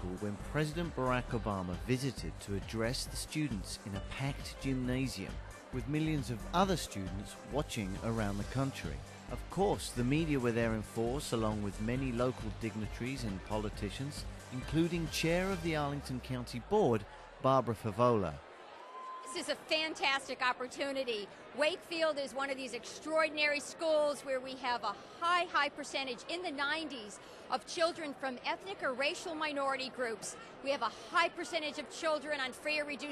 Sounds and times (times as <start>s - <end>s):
Female speech, woman speaking: 19.3s - 33.1s.